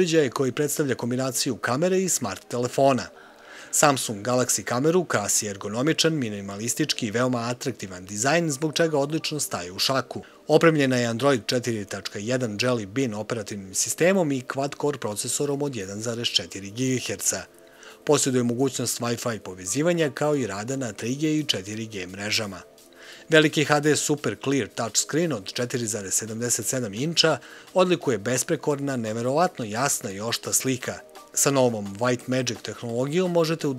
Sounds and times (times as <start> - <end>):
Speech: 0.0 - 22.7, 23.3 - 33.7.